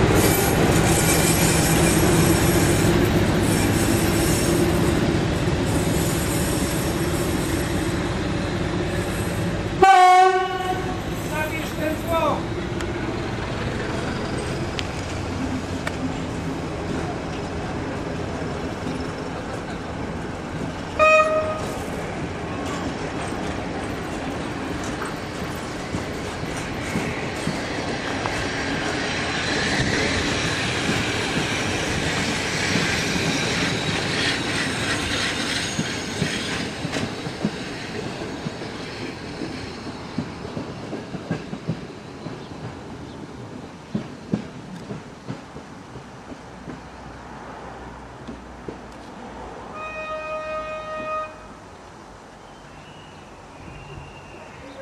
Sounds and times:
Railroad car, train wagon: 0.0s - 54.8s
Train: 0.0s - 54.8s.

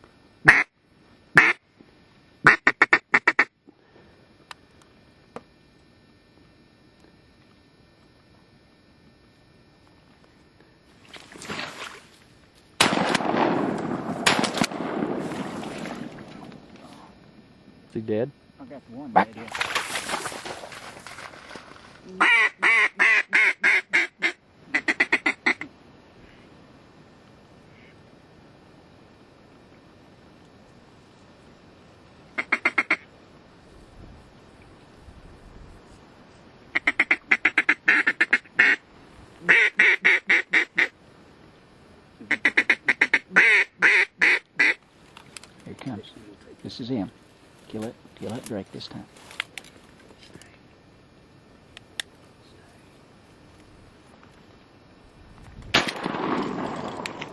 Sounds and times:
Outside, rural or natural: 0.0s - 57.3s
Quack: 0.4s - 0.7s, 1.4s - 1.6s, 2.5s - 3.5s, 22.2s - 25.7s, 32.4s - 33.1s, 36.8s - 38.8s, 39.5s - 40.9s, 42.3s - 44.8s
Speech: 17.9s - 19.6s, 45.6s - 49.1s.

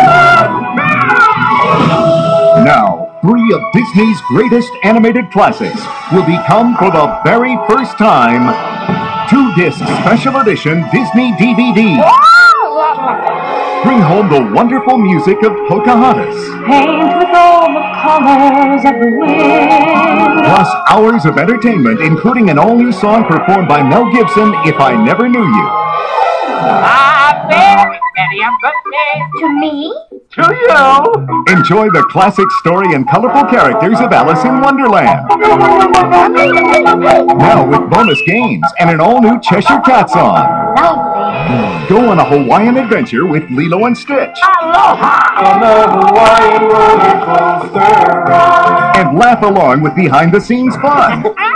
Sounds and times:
Music: 0.0s - 51.5s
Speech: 2.6s - 8.6s, 9.3s - 12.1s, 13.8s - 16.6s, 20.4s - 25.7s, 27.3s - 36.6s, 37.4s - 41.0s, 41.9s - 45.0s, 48.9s - 51.5s.

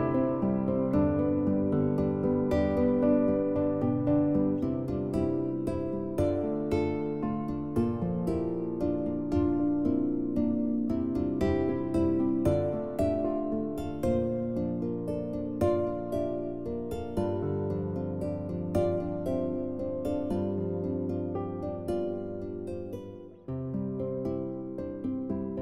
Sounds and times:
Music: 0.0s - 25.6s.

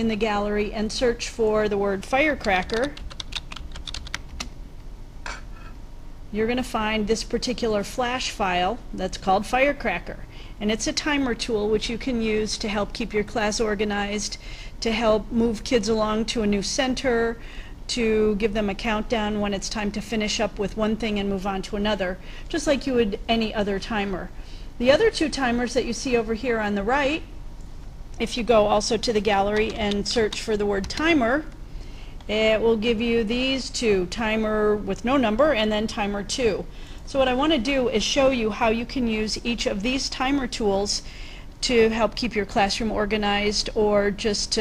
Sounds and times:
Speech: 0.0s - 3.0s, 6.3s - 27.3s, 28.2s - 31.5s, 32.3s - 41.0s, 41.6s - 44.6s.

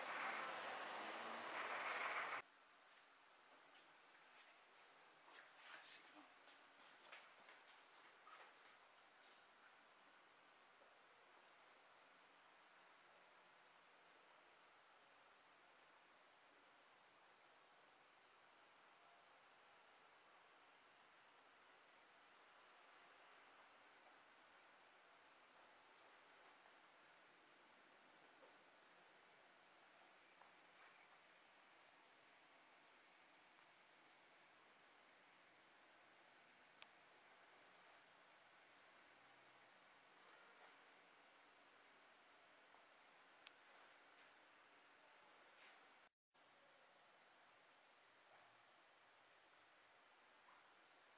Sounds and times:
Silence: 0.0s - 6.7s, 8.1s - 51.1s.

